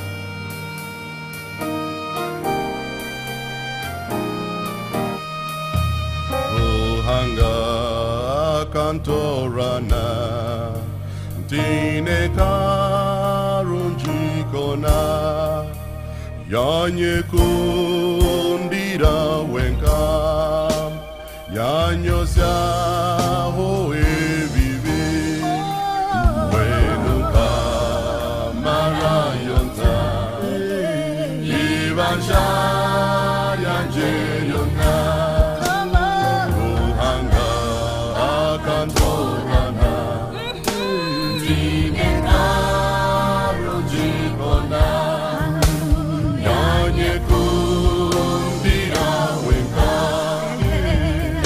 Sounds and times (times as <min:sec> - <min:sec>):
Gospel music: 0:00.0 - 0:51.4.